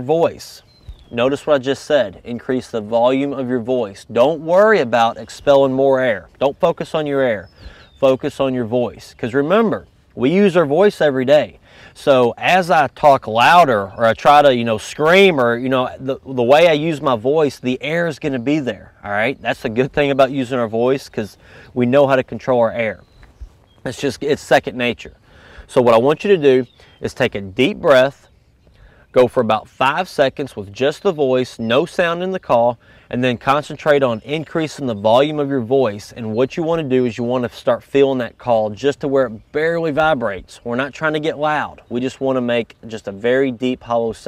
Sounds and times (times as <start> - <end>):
Speech: 0.0 - 23.0, 23.8 - 28.3, 29.1 - 44.2.